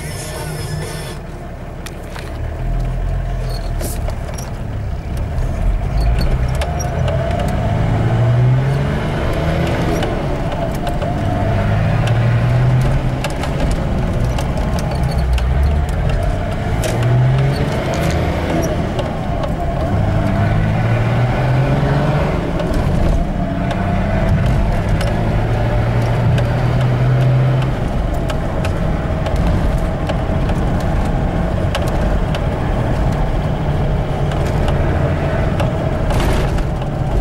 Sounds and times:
Clatter: 0:01.8 - 0:21.1, 0:22.4 - 0:37.2.

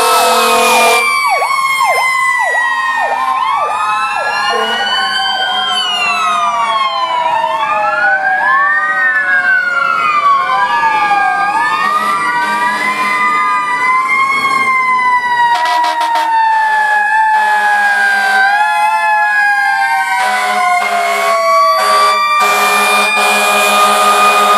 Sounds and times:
Fire engine, fire truck (siren): 0:00.0 - 0:24.5
Truck: 0:00.0 - 0:24.5.

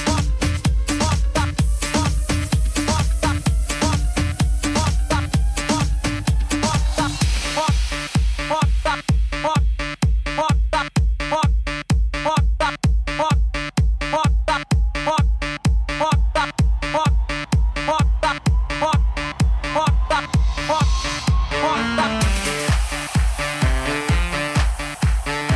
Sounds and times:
Exciting music: 0:00.0 - 0:09.5, 0:13.5 - 0:25.5
Trance music: 0:00.0 - 0:11.0, 0:11.6 - 0:25.5
Disco: 0:00.0 - 0:25.5
House music: 0:00.0 - 0:25.5
Rhythm and blues: 0:00.0 - 0:25.5.

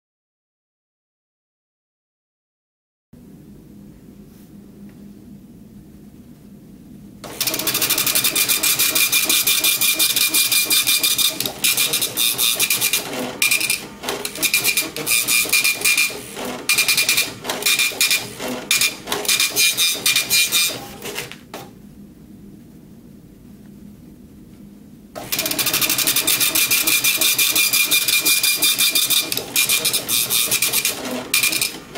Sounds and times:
Printer: 0:07.2 - 0:21.7, 0:25.2 - 0:31.9.

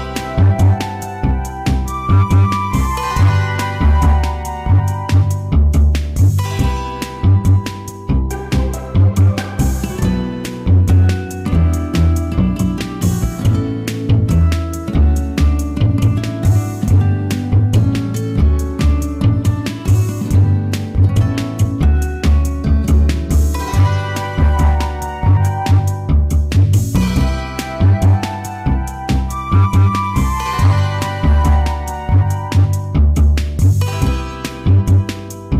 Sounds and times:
Theme music: 0:00.0 - 0:13.9, 0:23.3 - 0:35.5
Soundtrack music: 0:00.0 - 0:35.5.

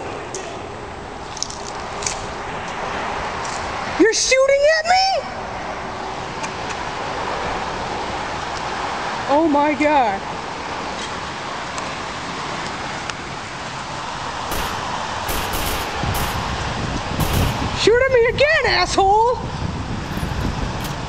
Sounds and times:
Speech: 0:04.0 - 0:05.3, 0:09.3 - 0:10.2, 0:17.8 - 0:19.4.

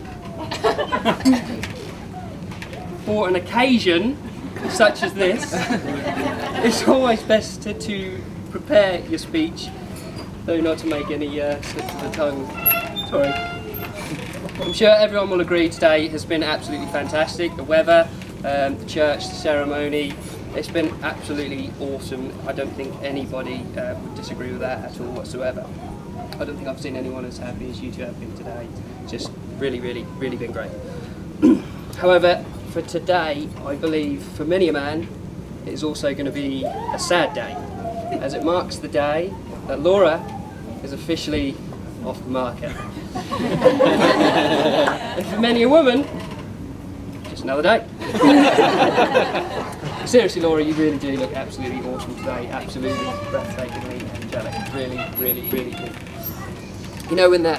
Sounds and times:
Narration, monologue: 0:02.6 - 0:57.5.

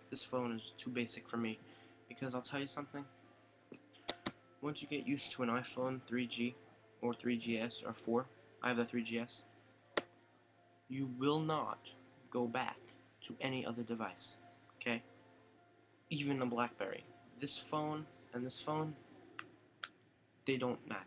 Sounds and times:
Speech: 0:00.0 - 0:03.1, 0:04.2 - 0:09.5, 0:10.9 - 0:15.1, 0:16.1 - 0:19.0, 0:20.5 - 0:21.0.

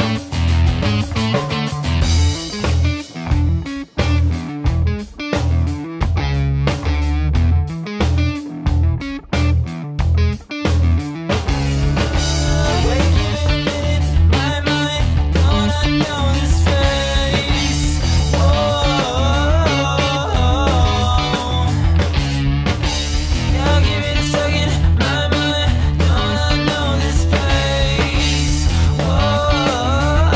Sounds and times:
Grunge: 0:00.0 - 0:30.3.

